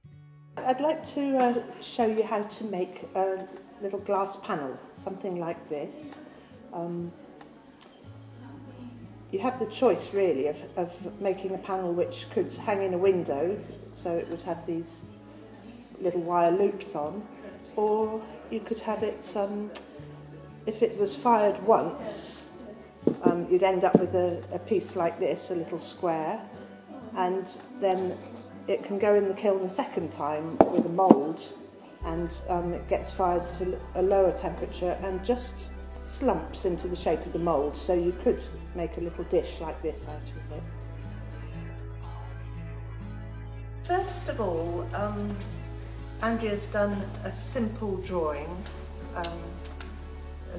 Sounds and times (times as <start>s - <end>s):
Music: 0.0s - 50.5s
Speech: 0.6s - 7.2s, 8.4s - 19.9s, 20.7s - 40.6s, 43.9s - 45.6s, 46.2s - 49.6s.